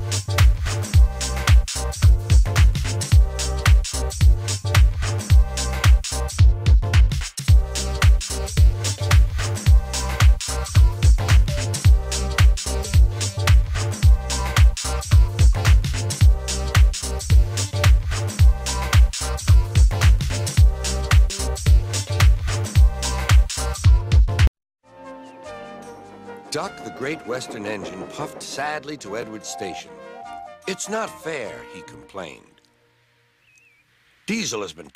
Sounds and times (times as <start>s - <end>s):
Music: 0.0s - 33.5s
Speech: 26.5s - 29.9s, 30.7s - 32.6s, 34.3s - 34.9s.